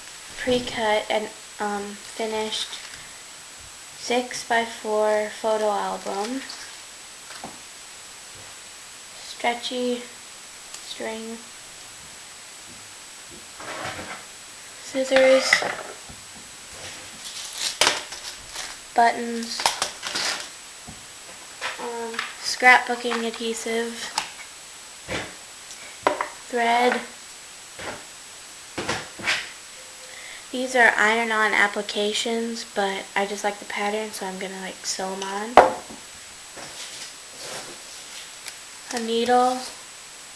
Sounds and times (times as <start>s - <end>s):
Speech: 0.4s - 2.8s, 4.0s - 6.7s, 9.2s - 10.2s, 10.8s - 11.5s, 14.8s - 15.8s, 19.0s - 19.7s, 21.8s - 24.2s, 26.5s - 27.2s, 30.5s - 35.6s, 38.9s - 39.8s.